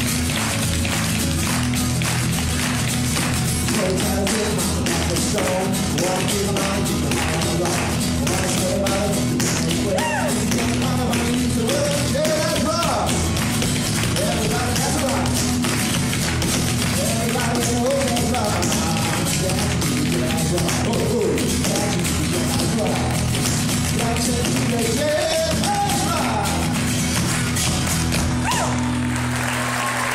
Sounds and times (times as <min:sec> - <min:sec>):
Music: 0:00.0 - 0:30.1.